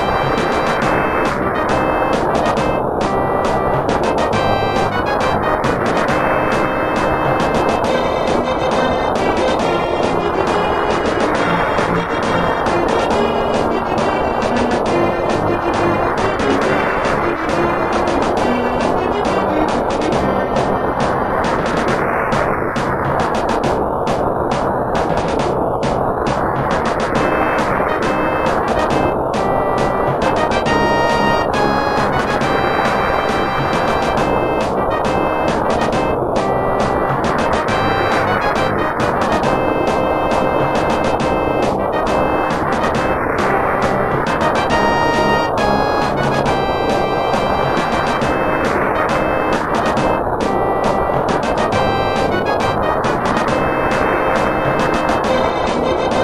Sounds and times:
Music: 0:00.0 - 0:56.2.

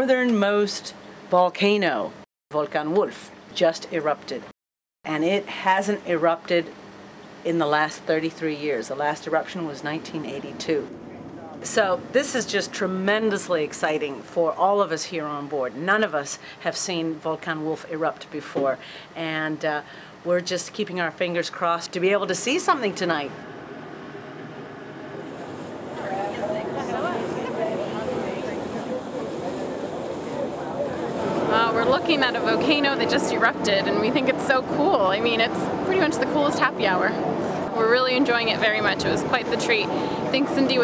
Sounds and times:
Speech: 0:00.0 - 0:04.5, 0:05.1 - 0:06.7, 0:26.0 - 0:40.8.

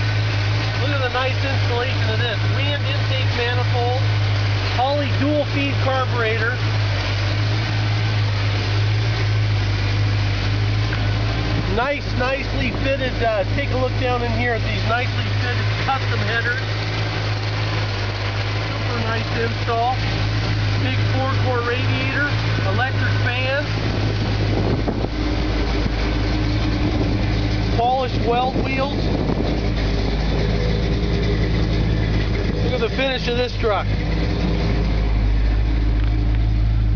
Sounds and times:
Car: 0:00.0 - 0:36.9
Idling: 0:00.0 - 0:36.9
Speech: 0:00.8 - 0:04.1, 0:04.7 - 0:06.6, 0:11.7 - 0:16.7, 0:18.7 - 0:20.1, 0:20.7 - 0:23.8, 0:27.7 - 0:29.0, 0:32.6 - 0:34.0.

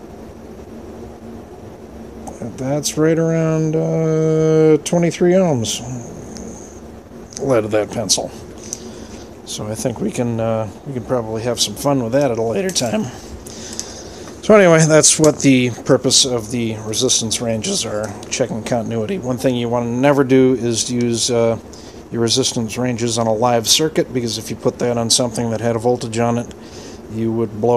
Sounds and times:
Speech: 0:02.3 - 0:06.2, 0:07.4 - 0:08.4, 0:09.5 - 0:13.2, 0:14.4 - 0:27.7.

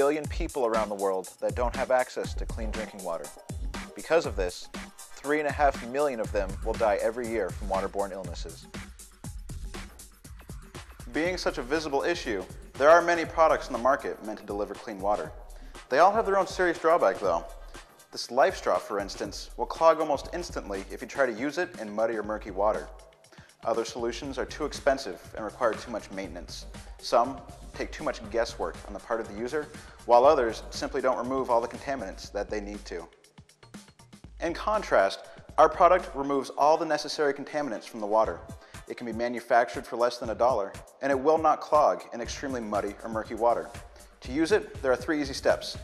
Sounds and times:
Speech: 0:00.0 - 0:03.3, 0:04.0 - 0:08.6, 0:11.1 - 0:17.5, 0:18.2 - 0:22.9, 0:23.6 - 0:33.1, 0:34.4 - 0:45.8
Music: 0:00.0 - 0:45.8.

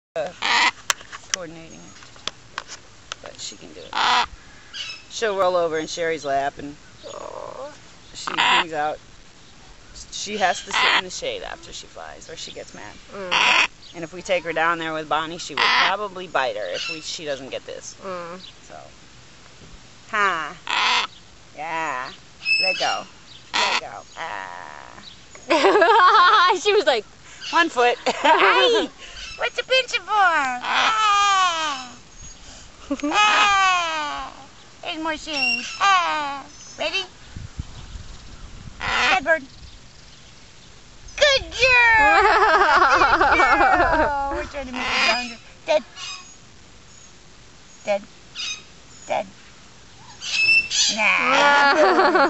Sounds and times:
Outside, rural or natural: 0:00.0 - 0:52.2
Bird: 0:06.6 - 0:08.7, 0:12.7 - 0:17.5, 0:22.0 - 0:25.5, 0:42.9 - 0:49.2, 0:49.9 - 0:51.7
Speech: 0:08.2 - 0:09.0, 0:41.2 - 0:45.9.

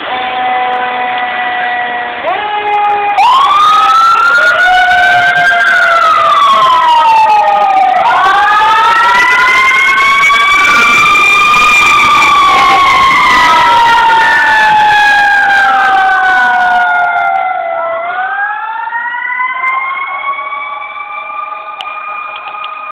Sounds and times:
Fire engine, fire truck (siren): 0:00.0 - 0:22.9.

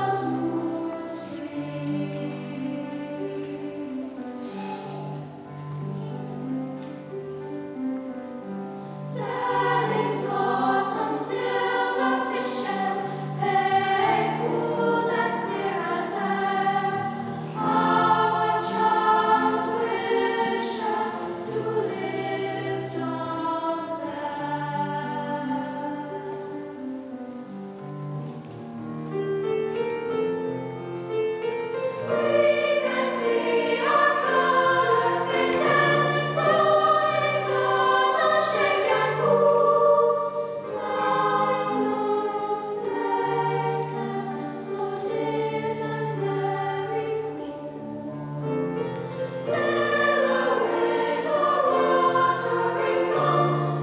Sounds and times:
Music: 0:00.0 - 0:53.8.

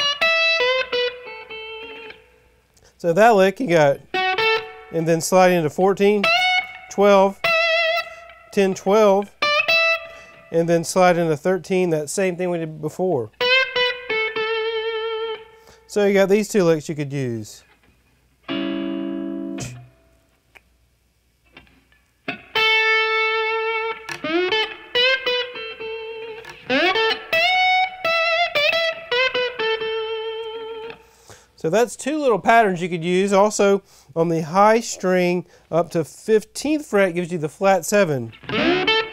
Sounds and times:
Guitar: 0:00.0 - 0:20.8, 0:21.4 - 0:39.1
Inside, small room: 0:00.0 - 0:39.1
Speech: 0:03.0 - 0:04.0, 0:04.9 - 0:06.3, 0:06.9 - 0:07.4, 0:08.6 - 0:09.3, 0:10.5 - 0:13.3, 0:15.9 - 0:17.7, 0:31.6 - 0:38.4.

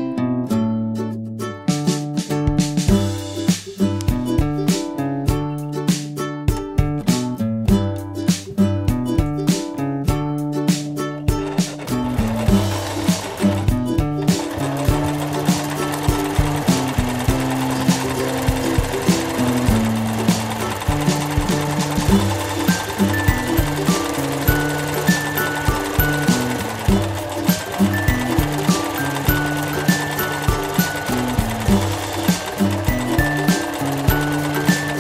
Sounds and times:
Music: 0:00.0 - 0:35.0
Sewing machine: 0:11.3 - 0:35.0.

